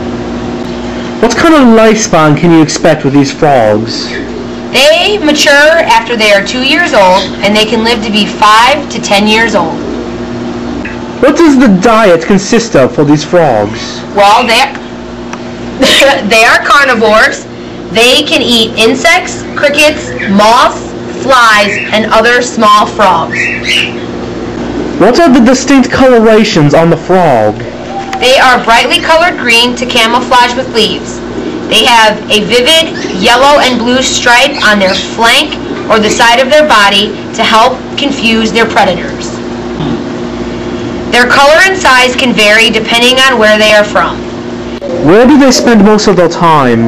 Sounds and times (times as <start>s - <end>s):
Speech: 1.2s - 4.2s, 4.8s - 9.8s, 11.2s - 14.7s, 25.0s - 27.6s, 44.9s - 46.8s.